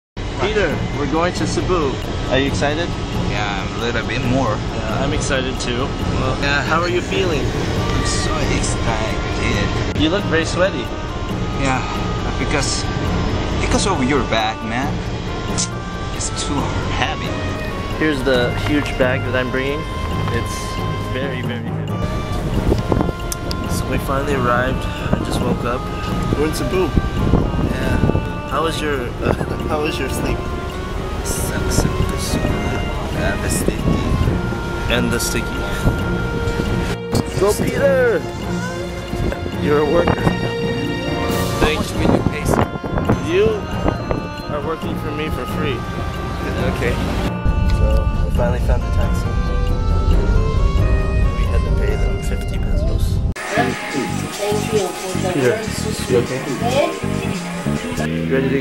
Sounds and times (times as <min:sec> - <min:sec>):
Music: 0:00.2 - 0:58.6
Speech: 0:00.4 - 0:10.9, 0:11.6 - 0:12.8, 0:13.6 - 0:15.0, 0:15.6 - 0:17.4, 0:18.0 - 0:21.8, 0:23.7 - 0:26.9, 0:27.7 - 0:30.4, 0:31.3 - 0:34.2, 0:34.9 - 0:35.8, 0:37.1 - 0:38.3, 0:39.5 - 0:40.4, 0:41.6 - 0:42.6, 0:43.2 - 0:43.7, 0:44.5 - 0:45.8, 0:46.4 - 0:47.0, 0:47.7 - 0:49.3, 0:51.4 - 0:58.6.